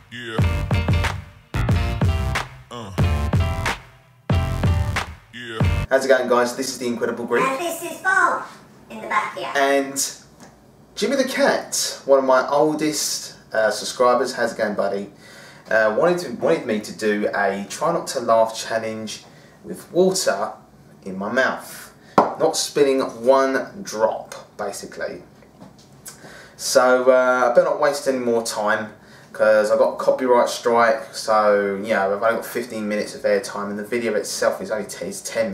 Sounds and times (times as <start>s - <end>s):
Speech: 5.4s - 10.3s, 11.0s - 15.1s, 15.7s - 25.3s, 26.6s - 35.5s.